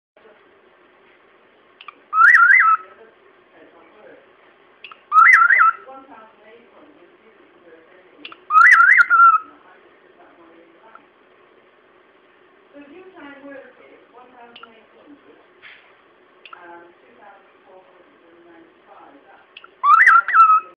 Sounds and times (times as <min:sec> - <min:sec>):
Speech: 0:00.2 - 0:00.6, 0:02.7 - 0:04.4, 0:05.8 - 0:08.6, 0:09.3 - 0:11.1, 0:12.7 - 0:15.5, 0:16.5 - 0:20.7.